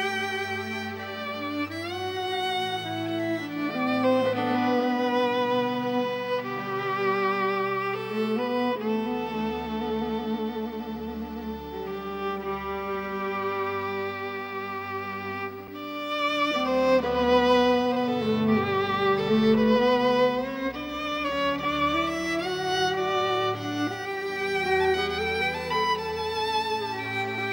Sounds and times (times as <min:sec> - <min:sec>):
Classical music: 0:00.0 - 0:27.5
Violin, fiddle: 0:00.0 - 0:27.5.